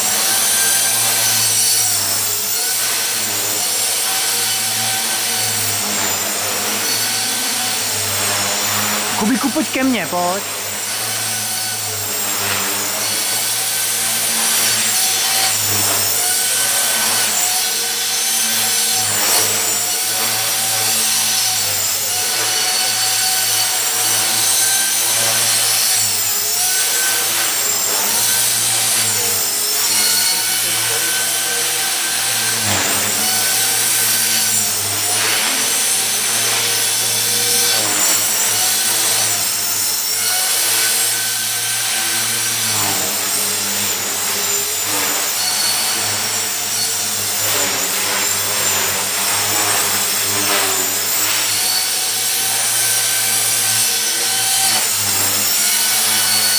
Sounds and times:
Helicopter: 0.0 - 9.2, 10.4 - 56.5.

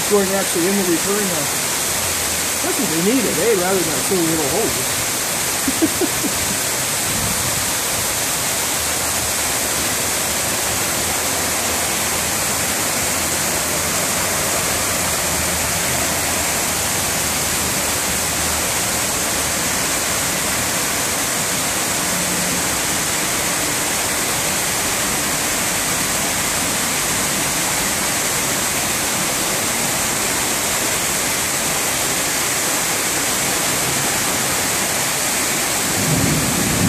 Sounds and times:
Rain on surface: 0.0 - 36.8.

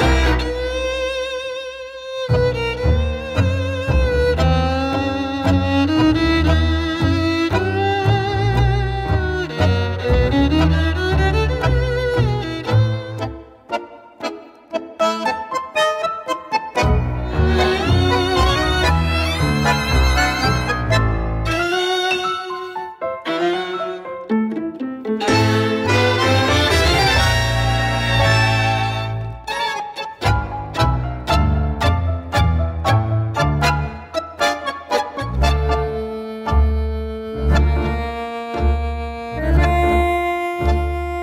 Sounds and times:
Music: 0.0 - 41.2.

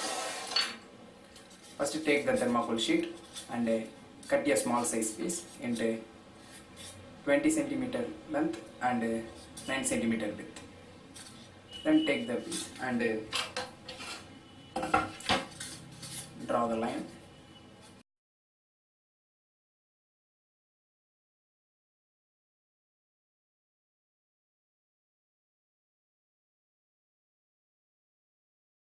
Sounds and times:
Speech: 1.8 - 6.1, 7.3 - 10.7, 11.8 - 13.3, 16.4 - 17.2.

